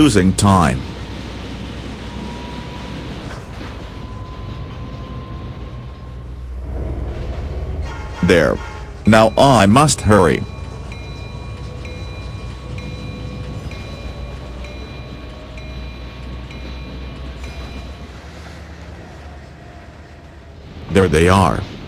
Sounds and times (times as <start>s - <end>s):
Speech: 0.0s - 0.8s, 8.2s - 10.5s, 20.9s - 21.6s
Railroad car, train wagon: 0.0s - 21.8s
Train: 0.0s - 21.8s.